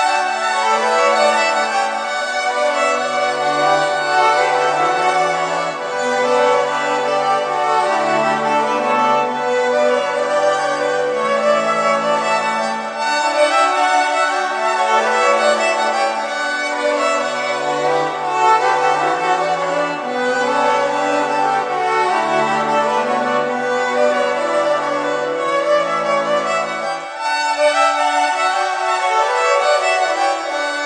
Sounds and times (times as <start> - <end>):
Classical music: 0.0 - 30.8
Violin, fiddle: 0.0 - 30.8.